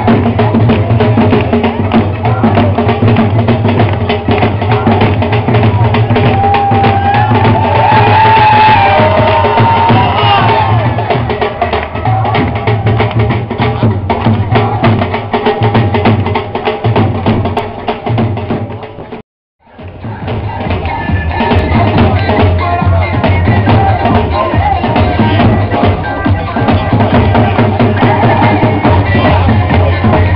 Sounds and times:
Music: 0.0s - 30.3s.

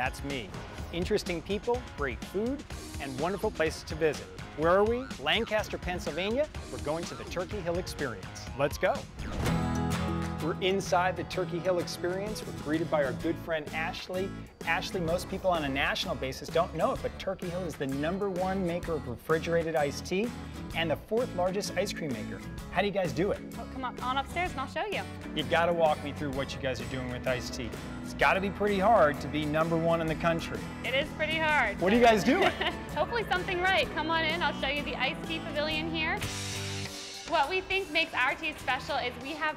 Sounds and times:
Music: 0.0s - 39.5s.

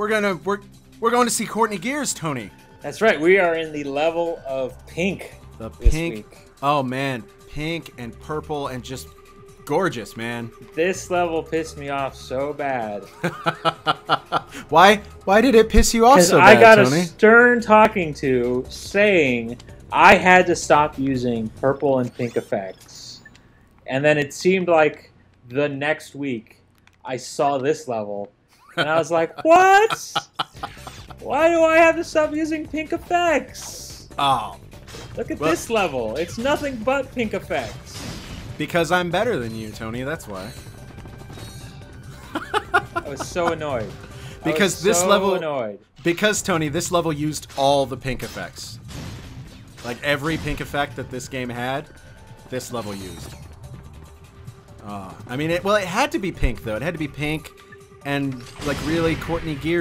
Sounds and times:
Music: 0.0s - 23.7s, 28.7s - 59.8s.

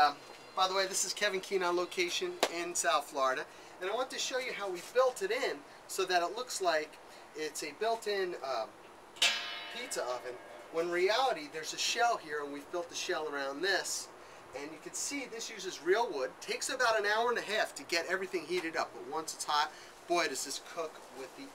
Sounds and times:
Speech: 0.0s - 8.8s, 9.8s - 21.5s.

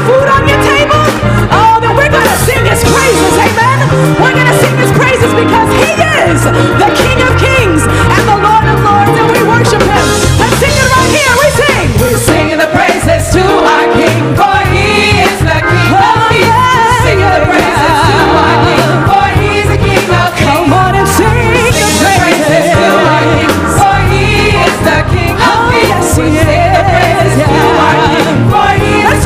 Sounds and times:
Female singing: 0.0s - 19.4s, 24.2s - 29.2s
Choir: 11.8s - 29.2s.

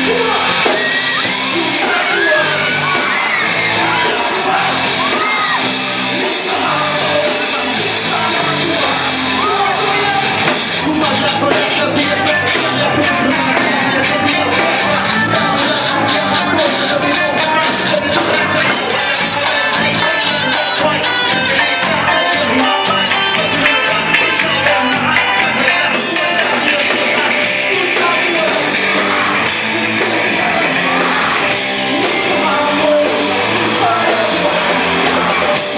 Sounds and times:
Heavy metal: 0.0s - 35.7s
Rock and roll: 0.0s - 35.7s.

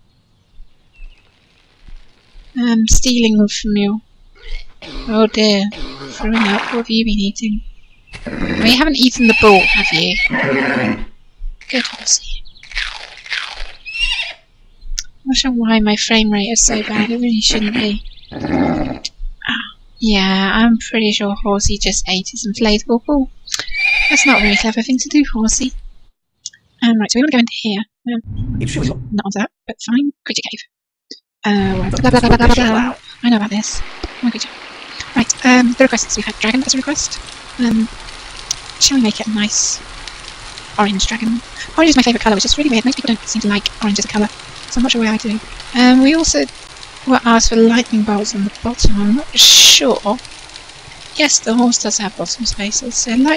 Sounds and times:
Speech: 2.6s - 4.0s, 4.9s - 7.6s, 8.6s - 10.4s, 11.7s - 12.4s, 15.0s - 18.0s, 19.0s - 25.8s, 26.8s - 37.9s, 38.8s - 39.8s, 40.8s - 46.5s, 47.1s - 50.2s, 51.2s - 53.3s.

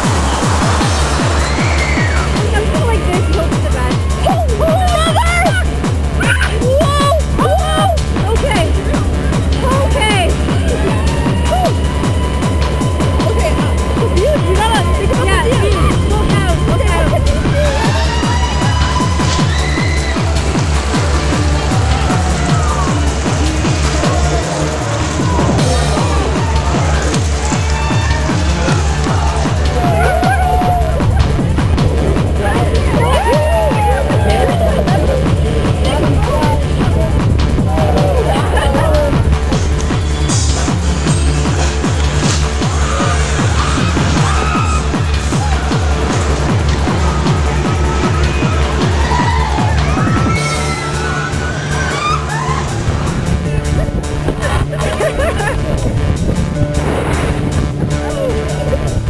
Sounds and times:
Music: 0.0s - 59.0s
Speech: 2.4s - 8.8s, 9.6s - 10.4s, 13.2s - 17.8s, 32.4s - 39.2s.

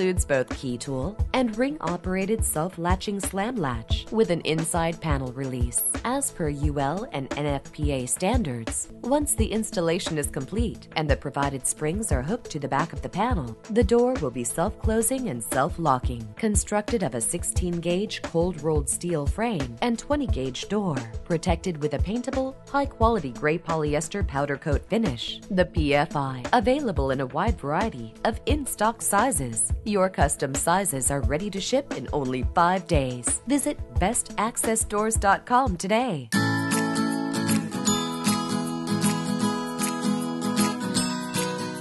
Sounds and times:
Speech: 0.0s - 36.4s
Music: 0.0s - 41.8s.

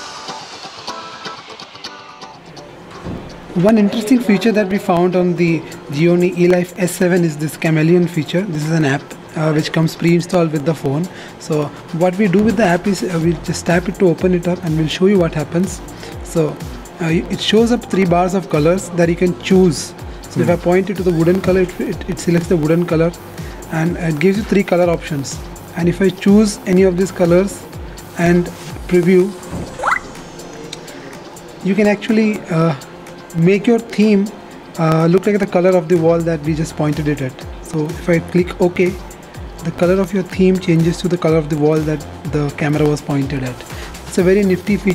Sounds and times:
Music: 0.0s - 44.9s
Speech: 3.6s - 27.6s, 28.2s - 29.4s, 31.6s - 39.0s, 39.6s - 44.9s.

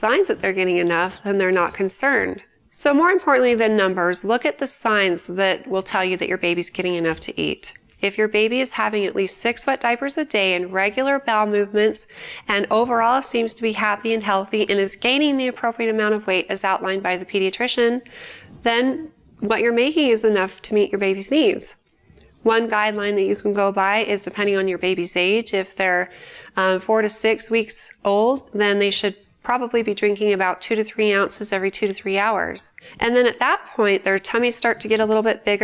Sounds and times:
Speech: 0.0s - 18.0s, 18.6s - 21.8s, 22.4s - 35.6s.

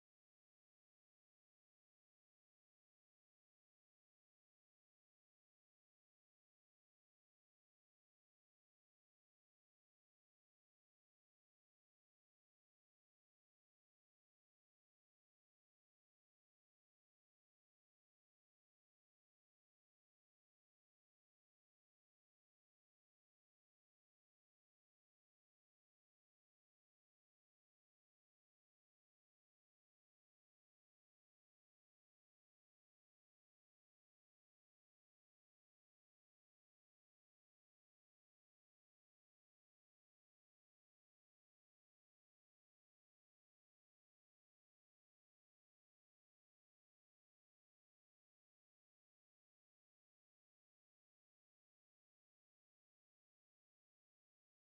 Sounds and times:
Silence: 0.0s - 54.6s.

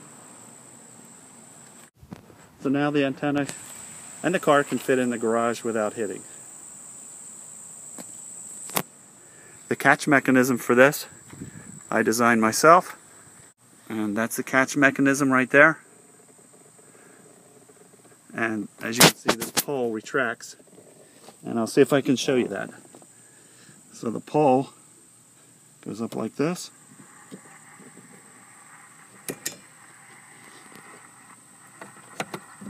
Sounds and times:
Speech: 2.6s - 3.6s, 4.2s - 6.4s, 9.7s - 11.1s, 11.9s - 13.0s, 13.9s - 15.8s, 18.3s - 20.6s, 21.4s - 22.8s, 23.9s - 24.8s, 25.8s - 26.7s.

